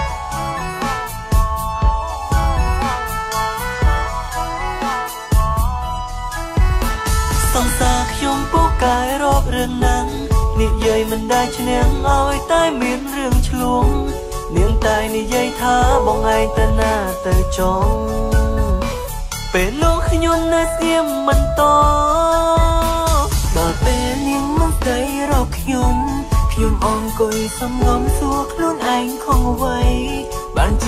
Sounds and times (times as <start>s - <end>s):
Music: 0.0s - 30.8s.